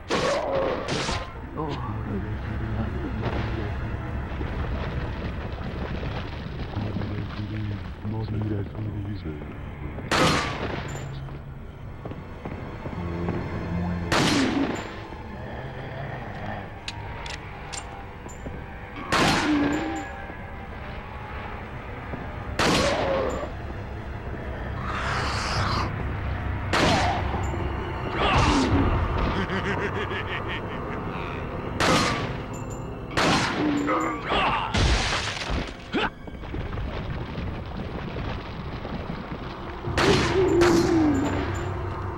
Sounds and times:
Music: 0:00.0 - 0:42.1
Gunshot, gunfire: 0:00.1 - 0:01.3, 0:10.1 - 0:10.9, 0:14.1 - 0:14.8, 0:19.1 - 0:19.7, 0:22.6 - 0:23.2, 0:26.7 - 0:27.2, 0:31.8 - 0:32.4, 0:33.2 - 0:33.8, 0:34.7 - 0:35.8, 0:39.9 - 0:41.0.

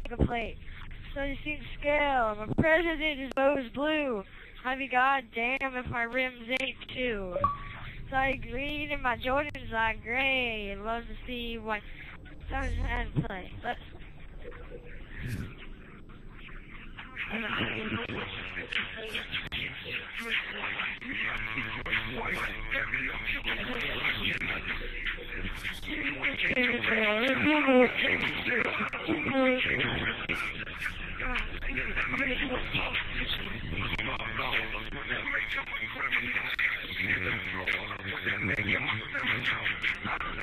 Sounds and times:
Speech: 0:00.0 - 0:14.0, 0:15.0 - 0:15.6, 0:16.7 - 0:40.4.

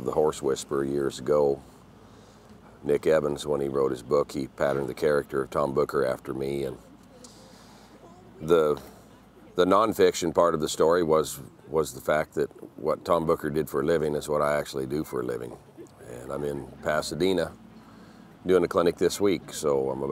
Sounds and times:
Speech: 0:00.0 - 0:01.6, 0:02.8 - 0:17.6, 0:18.4 - 0:20.1.

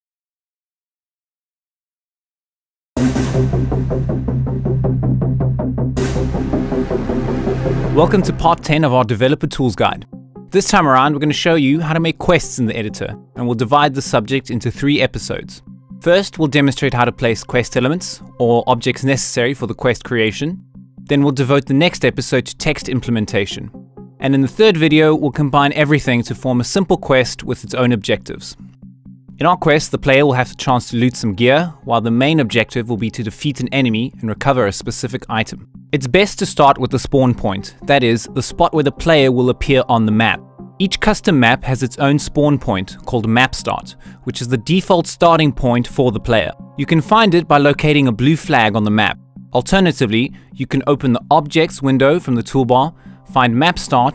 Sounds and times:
Music: 0:03.0 - 0:54.1
Speech: 0:08.0 - 0:28.6, 0:29.4 - 0:54.1.

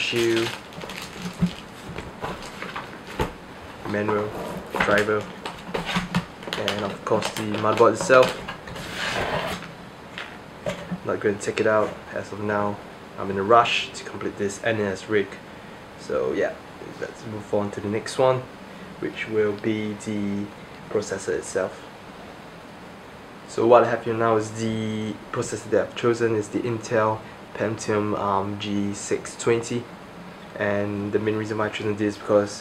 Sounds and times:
Speech: 0:00.0 - 0:00.6, 0:03.8 - 0:05.3, 0:06.6 - 0:08.4, 0:11.0 - 0:15.4, 0:16.0 - 0:21.9, 0:23.5 - 0:29.9, 0:30.6 - 0:32.6
Inside, small room: 0:00.0 - 0:32.6.

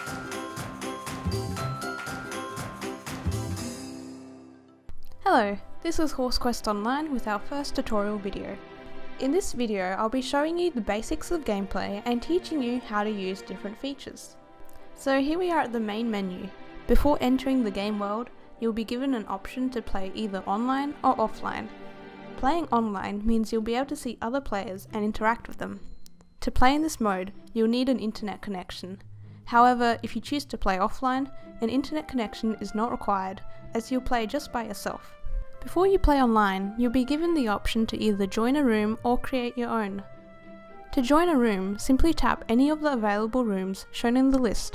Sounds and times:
Music: 0:00.0 - 0:44.7
Speech: 0:05.2 - 0:08.6, 0:09.2 - 0:14.3, 0:15.0 - 0:21.7, 0:22.4 - 0:25.8, 0:26.4 - 0:40.0, 0:40.9 - 0:44.7.

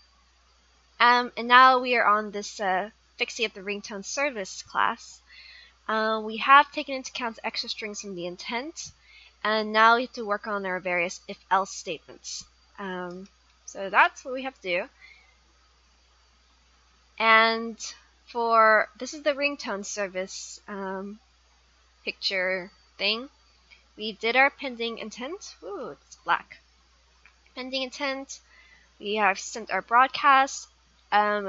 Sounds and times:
Speech: 0:01.0 - 0:05.2, 0:05.9 - 0:14.9, 0:17.2 - 0:21.2, 0:22.1 - 0:23.3, 0:24.0 - 0:26.6, 0:27.6 - 0:28.4, 0:29.0 - 0:31.4.

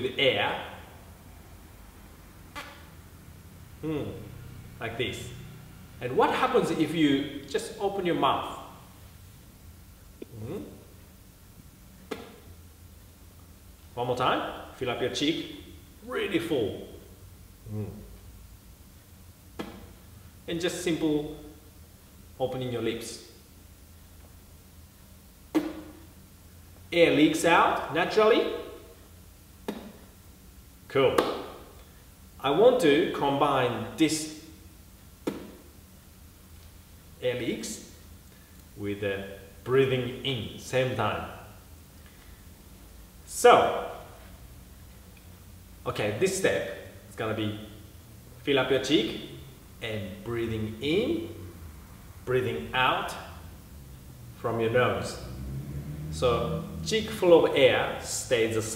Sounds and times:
Speech: 0:00.0 - 0:01.0, 0:03.8 - 0:08.8, 0:10.2 - 0:10.9, 0:14.0 - 0:18.1, 0:20.5 - 0:21.5, 0:22.4 - 0:23.3, 0:26.9 - 0:28.8, 0:30.9 - 0:31.4, 0:32.4 - 0:34.5, 0:37.2 - 0:38.0, 0:38.8 - 0:41.5, 0:43.3 - 0:44.2, 0:45.8 - 0:47.8, 0:48.4 - 0:51.4, 0:52.3 - 0:53.4, 0:54.4 - 0:55.3, 0:56.2 - 0:58.7.

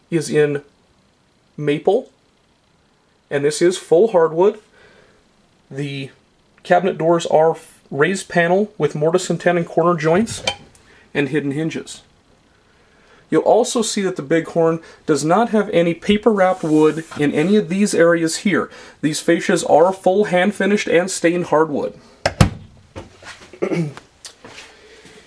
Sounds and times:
Speech: 0:00.1 - 0:00.7, 0:01.6 - 0:02.2, 0:03.3 - 0:04.7, 0:05.7 - 0:10.5, 0:11.1 - 0:12.1, 0:13.3 - 0:22.0.

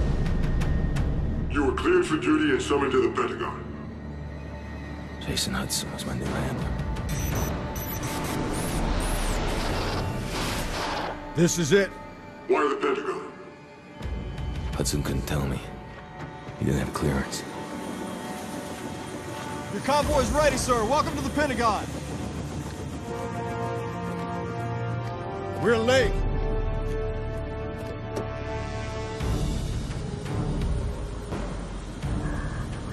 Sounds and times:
Music: 0:00.0 - 0:32.9.

